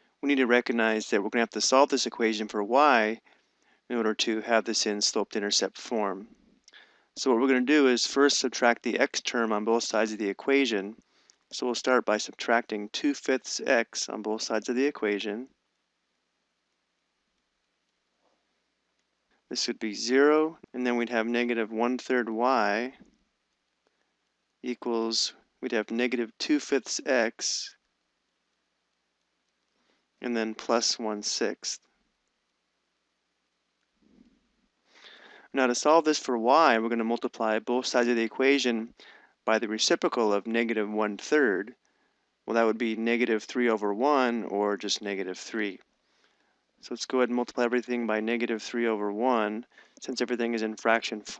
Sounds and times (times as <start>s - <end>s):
Speech: 0.2s - 3.2s, 3.9s - 6.3s, 7.2s - 11.0s, 11.6s - 15.5s, 19.5s - 23.0s, 24.7s - 27.8s, 30.2s - 31.8s, 35.5s - 38.9s, 39.5s - 41.8s, 42.5s - 45.8s, 46.8s - 51.3s.